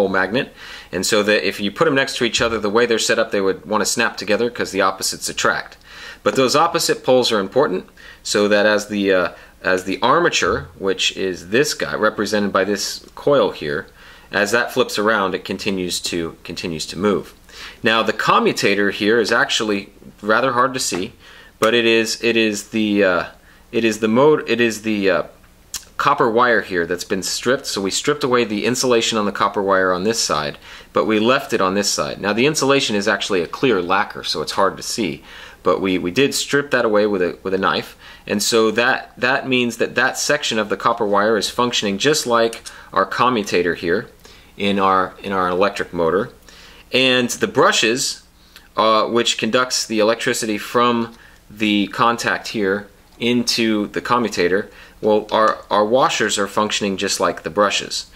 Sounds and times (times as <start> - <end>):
Speech: 0.0 - 58.1.